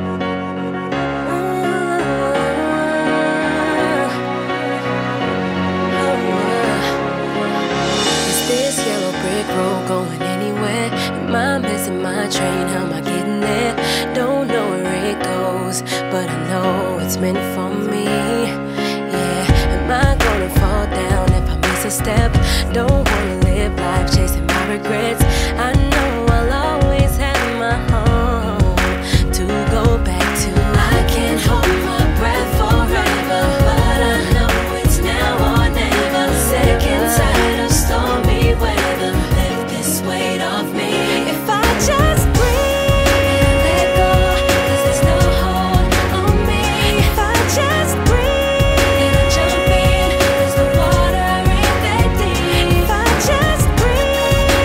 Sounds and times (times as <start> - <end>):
Music: 0.0 - 54.6.